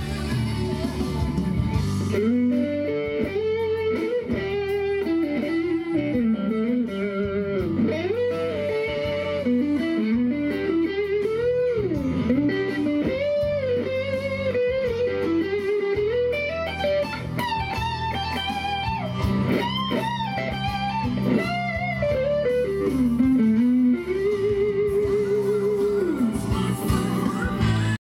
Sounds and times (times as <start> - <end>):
Electric guitar: 0.0 - 28.0.